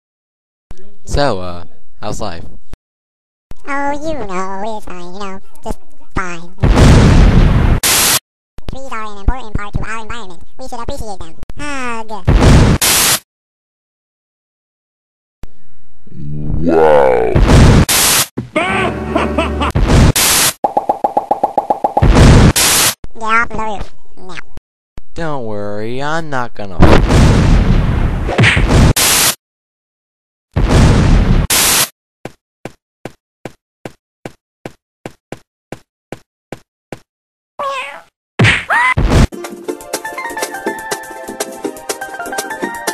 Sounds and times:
Explosion: 6.6s - 8.2s, 12.3s - 13.2s, 17.3s - 18.2s, 19.8s - 20.5s, 22.0s - 22.9s, 26.8s - 29.4s, 30.6s - 31.9s
Speech: 8.7s - 12.2s, 25.2s - 26.8s.

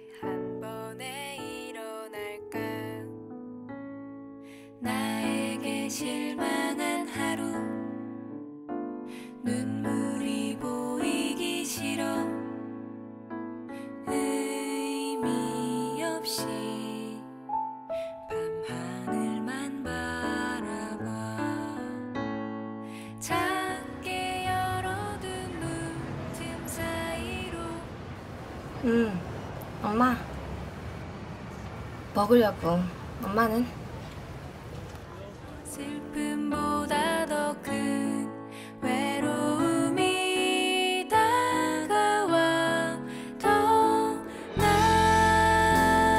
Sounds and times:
Music: 0.0s - 27.5s, 35.7s - 46.1s.

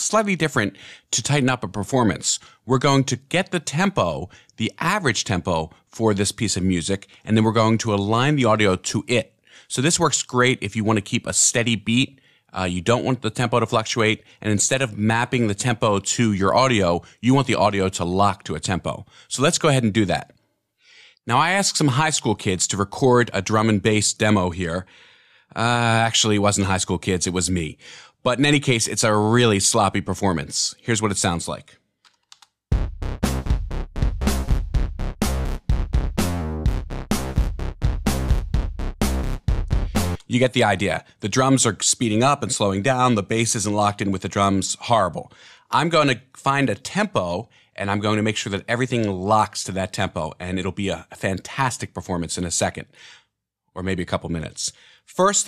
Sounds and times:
Speech: 0.0s - 20.3s, 21.3s - 24.9s, 25.6s - 31.8s, 40.2s - 53.0s, 53.8s - 55.4s.

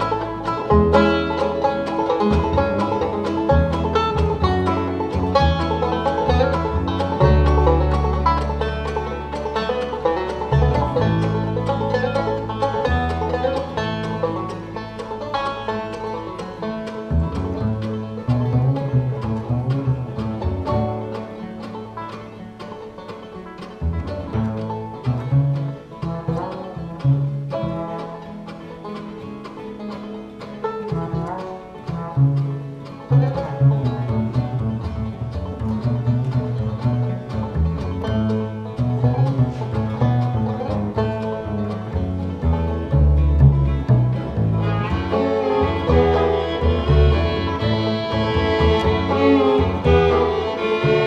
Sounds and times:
Bowed string instrument: 0.0s - 51.0s
Classical music: 0.0s - 51.0s.

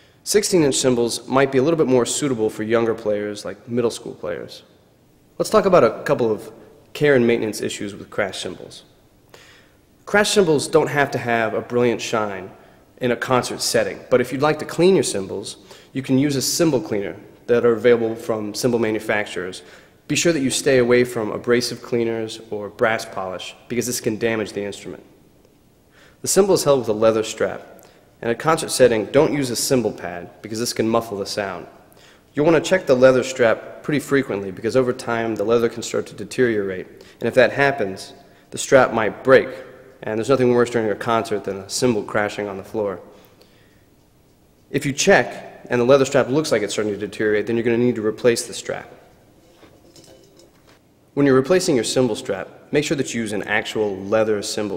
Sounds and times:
Speech: 0.2s - 4.7s, 5.4s - 8.9s, 10.1s - 25.2s, 26.2s - 31.8s, 32.4s - 43.1s, 44.7s - 49.0s, 51.2s - 54.7s.

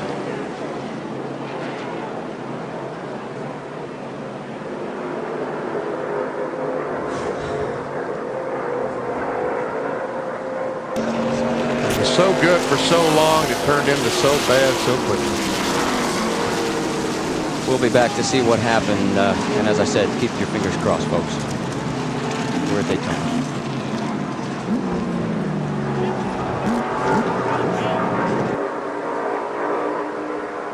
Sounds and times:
Vehicle: 0.0s - 30.7s
Speech: 11.9s - 15.4s, 17.7s - 21.4s, 22.7s - 23.4s.

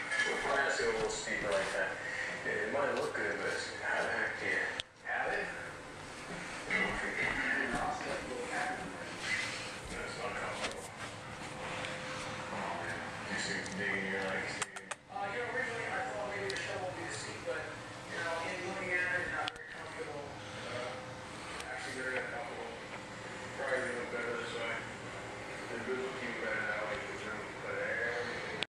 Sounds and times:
Speech: 0.2s - 5.8s, 6.7s - 11.0s, 12.5s - 28.6s.

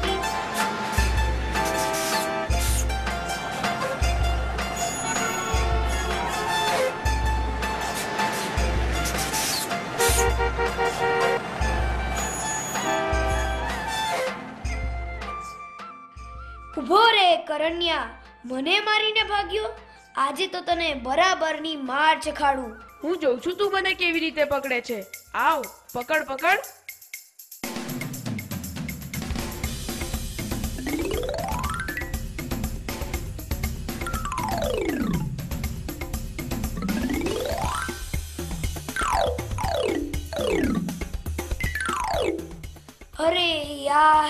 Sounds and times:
Music: 0.0s - 44.3s
Speech: 16.8s - 26.7s, 43.2s - 44.3s.

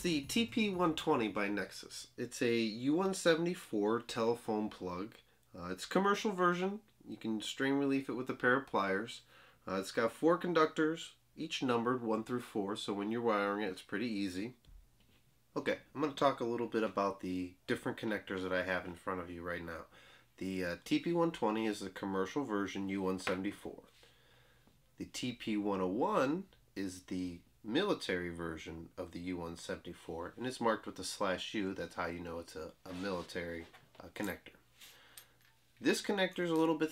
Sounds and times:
Speech: 0.0s - 14.6s, 15.6s - 23.9s, 25.0s - 34.6s, 35.8s - 36.9s.

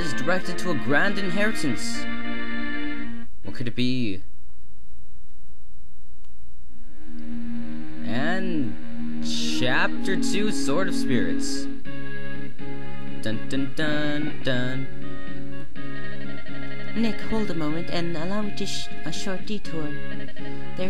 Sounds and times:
Speech: 0.0s - 2.0s, 3.5s - 4.3s, 8.1s - 11.7s, 13.2s - 14.9s, 17.0s - 20.0s
Music: 0.0s - 4.0s, 6.8s - 20.8s.

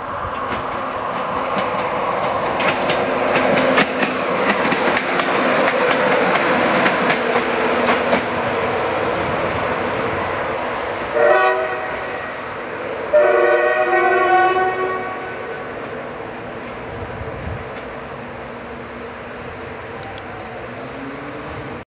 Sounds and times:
Vehicle: 16.7s - 21.8s.

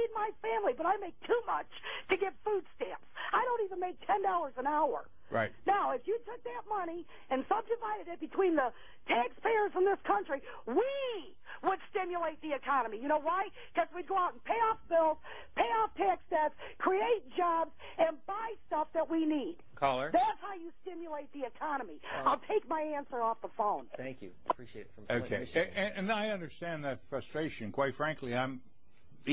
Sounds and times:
Speech: 3.4s - 8.4s, 22.2s - 28.6s.

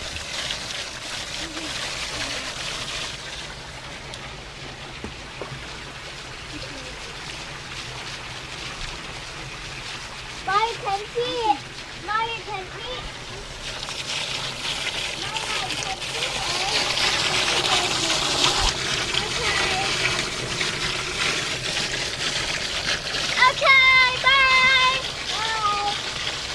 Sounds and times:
Liquid: 0.0s - 26.5s
Water: 0.0s - 26.5s
Speech: 10.5s - 13.0s, 15.2s - 16.9s, 19.2s - 19.9s, 23.4s - 26.0s.

